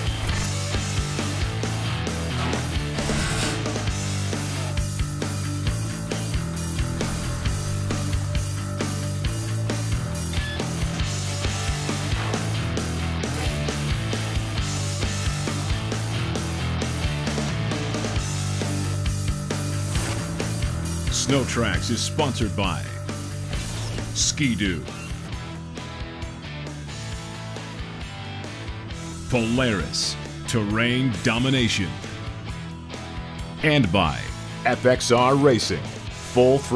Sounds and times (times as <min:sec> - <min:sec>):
Music: 0:00.0 - 0:36.7
Speech: 0:21.1 - 0:23.0, 0:24.2 - 0:25.0, 0:29.3 - 0:32.1, 0:33.6 - 0:36.7.